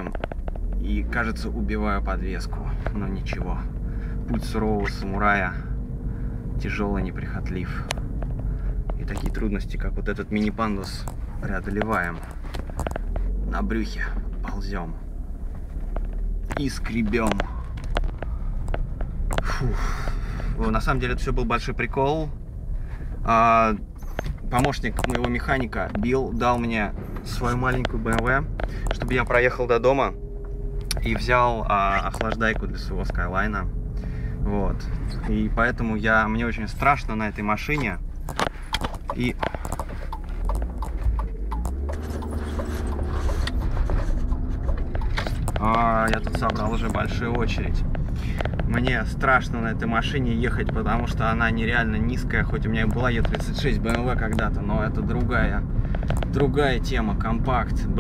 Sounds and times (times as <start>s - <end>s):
Car: 0.0s - 58.0s
Speech: 0.8s - 3.7s, 4.3s - 5.7s, 6.6s - 8.0s, 9.0s - 12.3s, 13.4s - 15.0s, 16.5s - 17.6s, 20.6s - 22.4s, 23.3s - 23.8s, 24.4s - 30.2s, 31.0s - 33.7s, 34.4s - 38.0s, 39.1s - 39.5s, 45.6s - 47.8s, 48.7s - 55.7s, 56.3s - 58.0s.